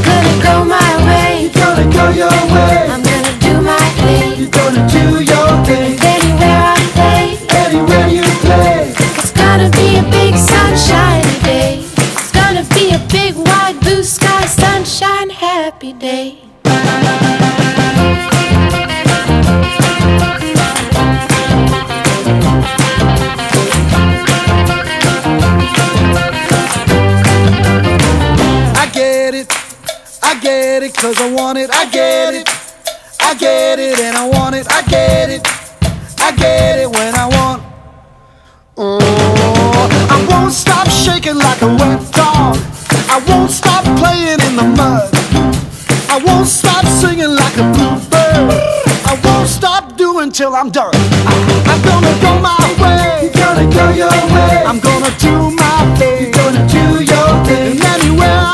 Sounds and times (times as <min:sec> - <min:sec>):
Music: 0:00.0 - 0:49.8, 0:50.9 - 0:58.5.